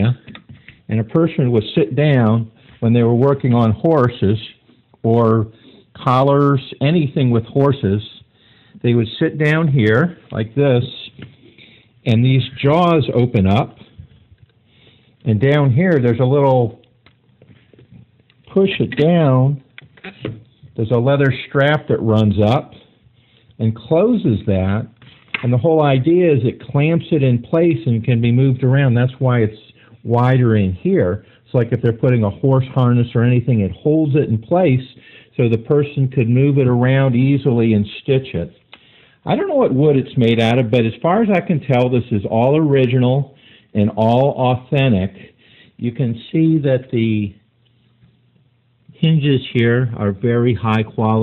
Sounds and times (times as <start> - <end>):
Speech: 0.0 - 0.3, 0.9 - 11.2, 12.0 - 13.9, 15.2 - 16.8, 18.5 - 19.7, 20.7 - 22.9, 23.6 - 38.6, 39.2 - 47.4, 48.9 - 51.2.